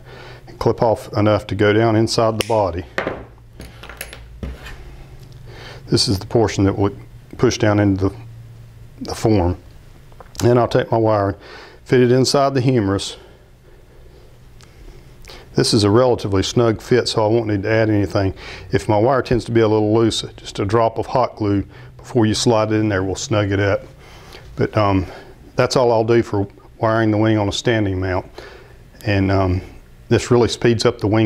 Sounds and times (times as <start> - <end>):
Speech: 0.6 - 2.9, 5.9 - 8.2, 9.0 - 9.6, 10.4 - 13.3, 15.6 - 23.9, 24.6 - 28.3, 29.0 - 31.2.